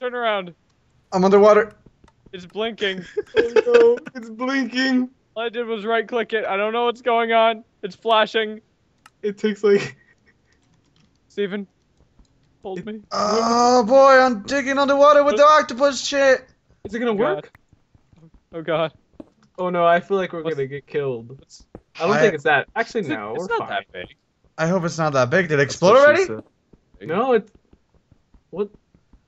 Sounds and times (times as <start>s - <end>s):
Speech: 2.4s - 8.6s, 12.7s - 17.5s, 19.6s - 26.4s, 27.0s - 27.5s.